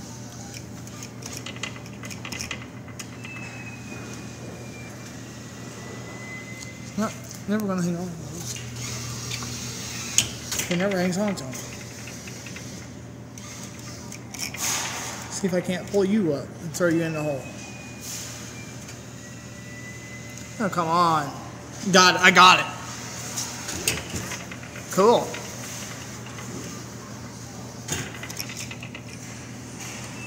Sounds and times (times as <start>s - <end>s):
Speech: 7.0s - 8.5s, 15.3s - 17.4s, 20.6s - 22.8s, 24.9s - 25.4s.